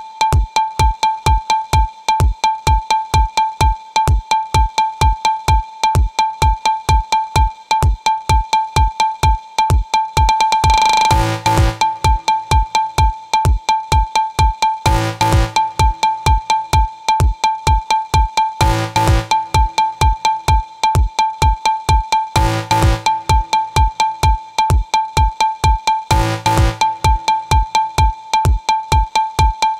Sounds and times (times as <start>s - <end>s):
Music: 0.0s - 29.7s.